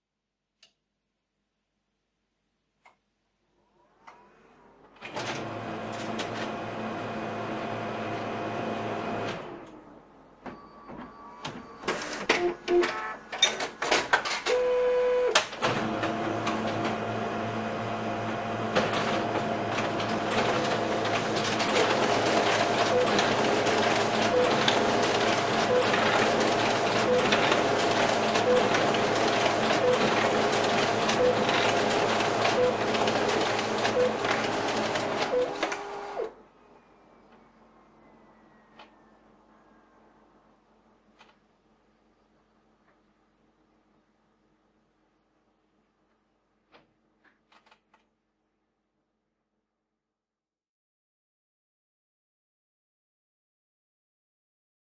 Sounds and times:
Printer: 0:03.8 - 0:39.3.

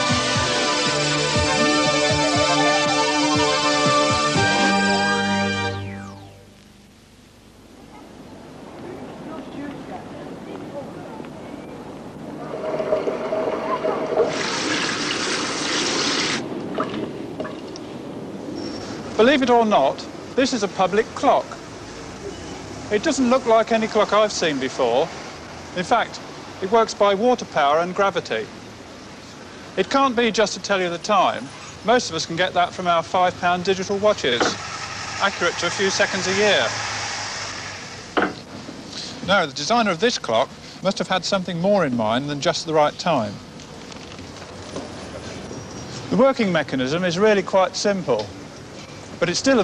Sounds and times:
Speech: 0:08.8 - 0:11.9, 0:19.2 - 0:21.6, 0:22.9 - 0:25.1, 0:25.8 - 0:28.5, 0:29.8 - 0:34.6, 0:35.2 - 0:36.7, 0:39.2 - 0:43.4, 0:46.1 - 0:48.4, 0:49.2 - 0:49.6.

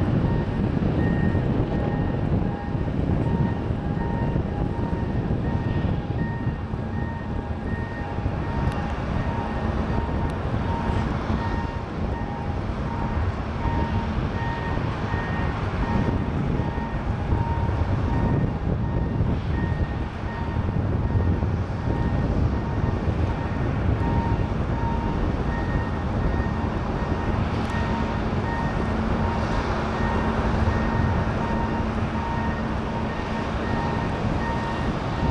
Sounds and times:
Field recording: 0:00.0 - 0:35.3.

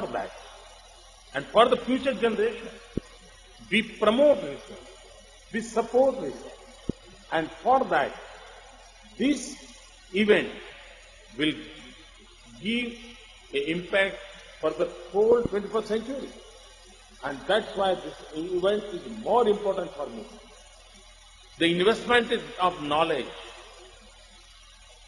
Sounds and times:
Male speech, man speaking: 0:00.0 - 0:00.4, 0:01.4 - 0:02.8, 0:03.7 - 0:04.9, 0:05.6 - 0:06.6, 0:07.3 - 0:08.3, 0:09.2 - 0:10.7, 0:11.4 - 0:11.8, 0:12.5 - 0:16.4, 0:17.2 - 0:20.4, 0:21.6 - 0:23.6
Narration, monologue: 0:00.0 - 0:25.0.

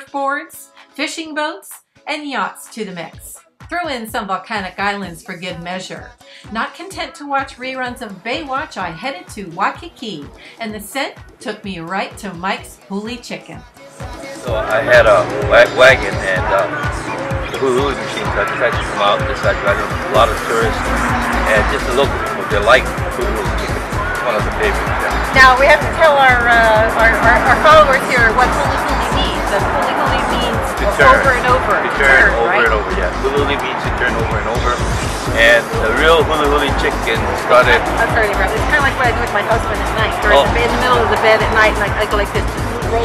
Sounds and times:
Speech: 0:00.0 - 0:13.6, 0:14.5 - 0:16.8, 0:17.6 - 0:20.8, 0:21.5 - 0:43.0
Music: 0:00.0 - 0:43.0.

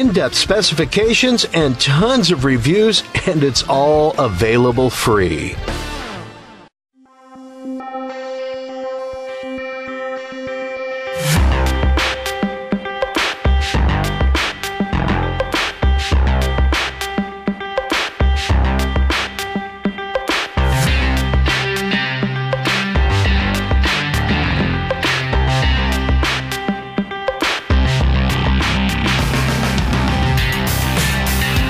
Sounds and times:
Music: 0:00.0 - 0:31.6.

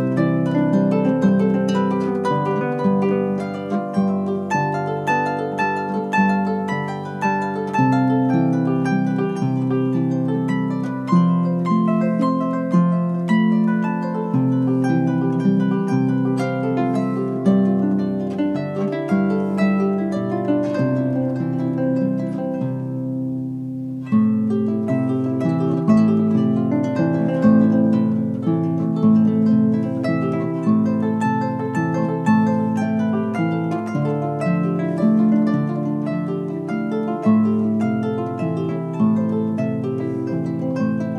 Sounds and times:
Plucked string instrument: 0:00.0 - 0:41.1.

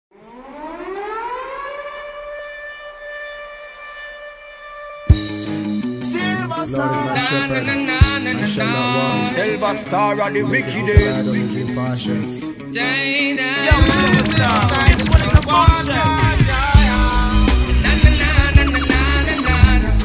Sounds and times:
Civil defense siren: 0:00.1 - 0:05.2
Music: 0:04.1 - 0:20.0
Singing: 0:06.1 - 0:11.4, 0:12.6 - 0:20.0.

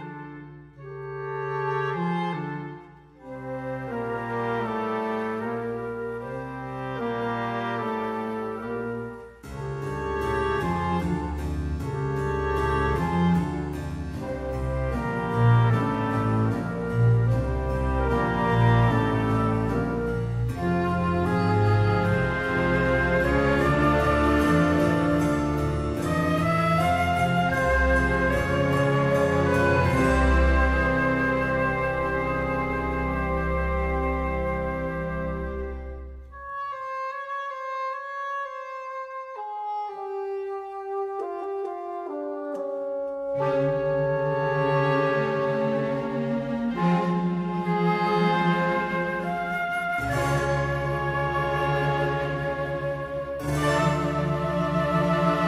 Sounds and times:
Music: 0:00.0 - 0:55.4.

